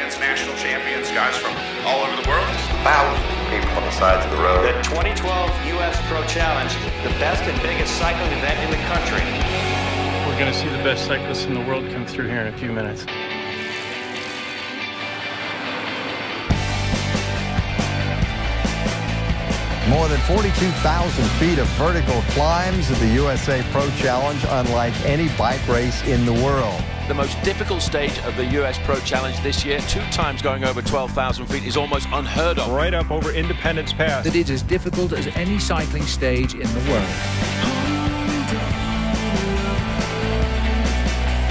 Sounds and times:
Speech: 0:00.0 - 0:09.4, 0:10.2 - 0:13.1, 0:19.8 - 0:37.2
Music: 0:00.0 - 0:41.5.

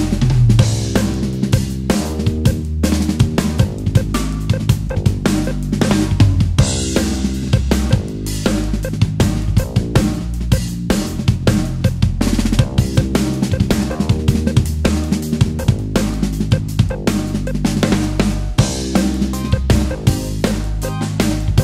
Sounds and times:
Drum: 0:00.0 - 0:21.6
Drum kit: 0:00.0 - 0:21.6.

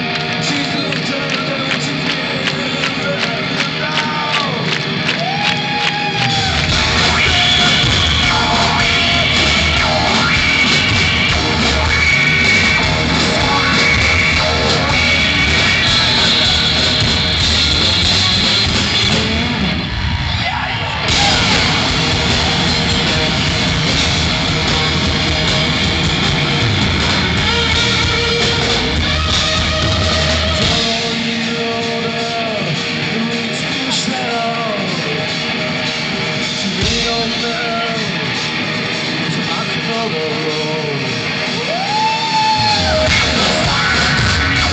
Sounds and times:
Blues: 0:00.0 - 0:44.7
Rhythm and blues: 0:00.0 - 0:44.7.

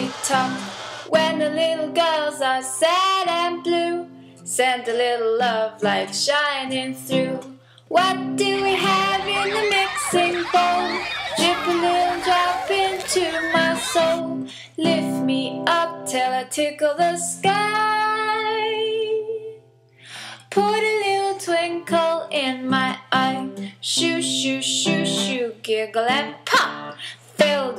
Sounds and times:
Music: 0:00.0 - 0:27.7.

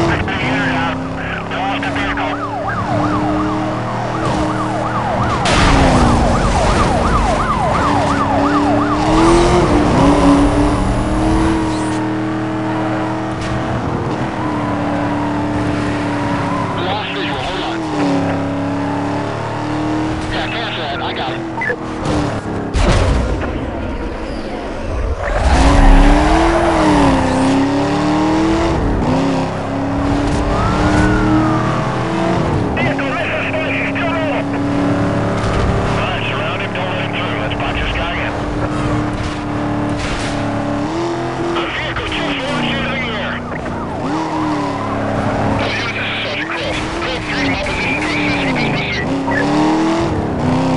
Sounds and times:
Car: 0:00.0 - 0:50.7
Police car (siren): 0:00.1 - 0:13.2, 0:14.0 - 0:21.8, 0:30.3 - 0:34.6, 0:41.5 - 0:49.7.

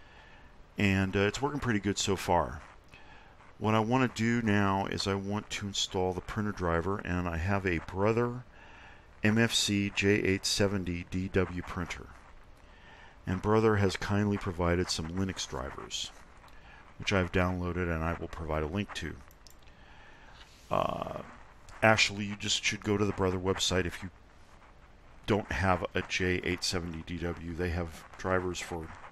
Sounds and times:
Speech: 0:00.8 - 0:02.6, 0:03.6 - 0:08.5, 0:09.2 - 0:12.2, 0:13.3 - 0:16.1, 0:17.0 - 0:19.2, 0:20.7 - 0:24.1, 0:25.3 - 0:29.0.

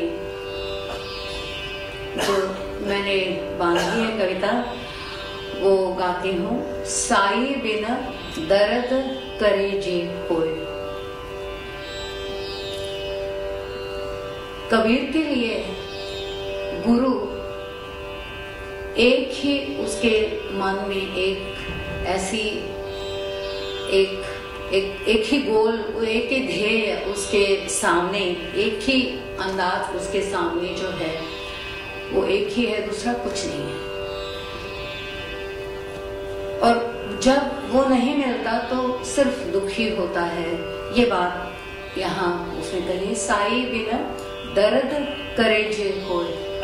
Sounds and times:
Music: 0:00.0 - 0:46.6
Speech: 0:02.2 - 0:04.7, 0:05.6 - 0:10.6, 0:23.9 - 0:31.3, 0:32.1 - 0:33.8, 0:42.0 - 0:46.6.

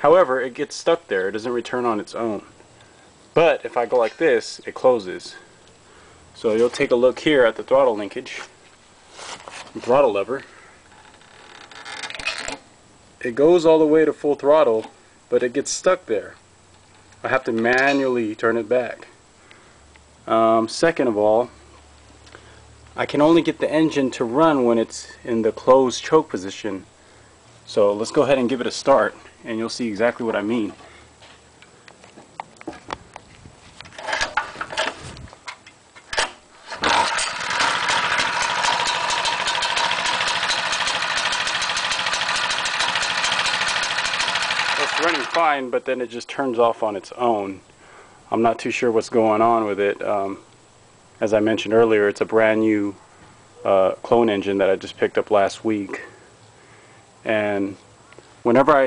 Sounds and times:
Speech: 0:00.0 - 0:02.5, 0:03.4 - 0:05.5, 0:06.4 - 0:08.5, 0:09.8 - 0:10.5, 0:13.2 - 0:16.4, 0:17.2 - 0:19.2, 0:20.3 - 0:21.6, 0:23.0 - 0:26.9, 0:27.7 - 0:30.8, 0:44.8 - 0:47.6, 0:48.3 - 0:50.5, 0:51.2 - 0:53.0, 0:53.6 - 0:56.2, 0:57.2 - 0:57.8, 0:58.4 - 0:58.8.

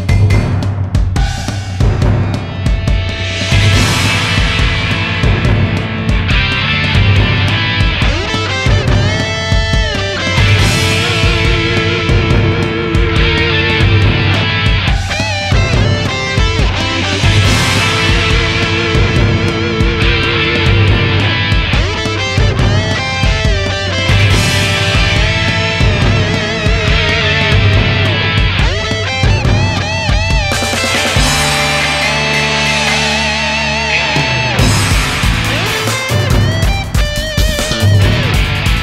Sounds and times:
Music: 0:00.0 - 0:38.8.

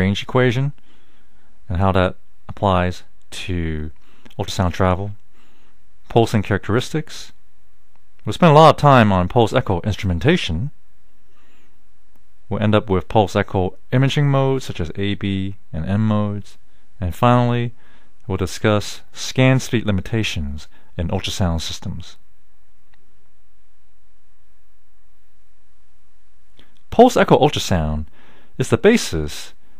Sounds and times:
Speech: 0:00.0 - 0:00.8, 0:01.7 - 0:05.2, 0:06.1 - 0:07.4, 0:08.2 - 0:10.8, 0:12.5 - 0:22.2, 0:26.9 - 0:29.6.

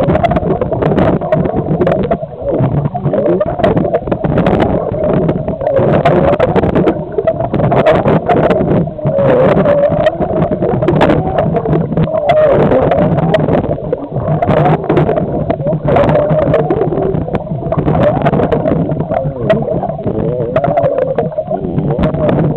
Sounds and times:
Gurgling: 0:00.0 - 0:22.5.

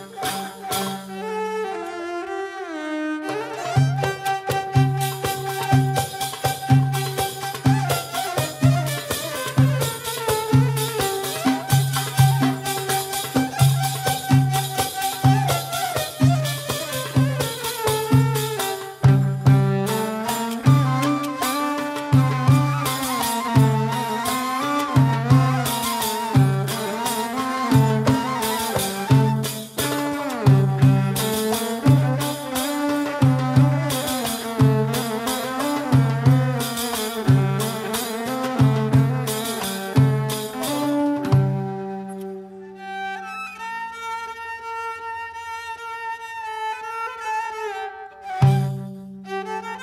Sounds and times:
Music: 0:00.0 - 0:49.8.

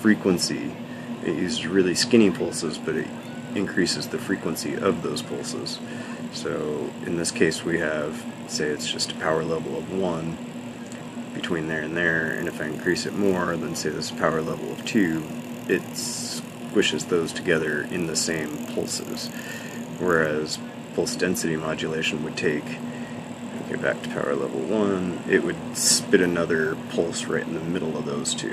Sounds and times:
Speech: 0:00.0 - 0:10.4, 0:11.3 - 0:22.9, 0:23.5 - 0:28.5.

